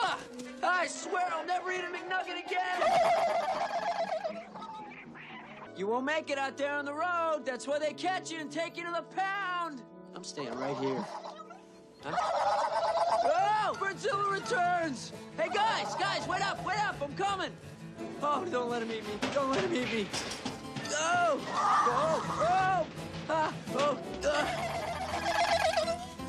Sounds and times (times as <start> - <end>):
Gobble: 2.7 - 5.7, 10.5 - 13.5, 24.3 - 26.2.